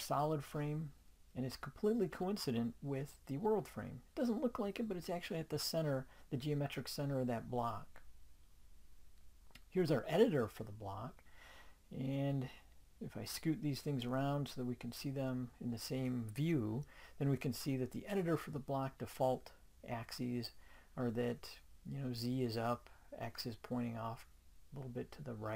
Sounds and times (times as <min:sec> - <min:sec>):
Speech: 0:00.0 - 0:08.0, 0:09.6 - 0:11.2, 0:11.9 - 0:25.5.